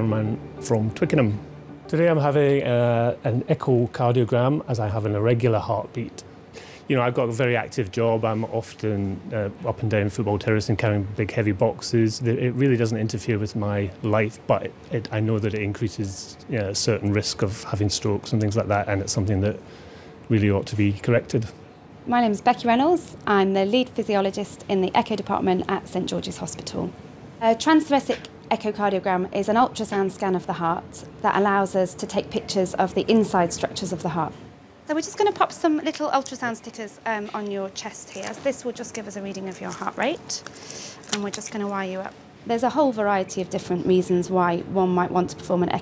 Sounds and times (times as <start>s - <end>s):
Speech: 0.0s - 6.2s, 6.9s - 19.6s, 20.3s - 34.3s, 34.9s - 40.4s.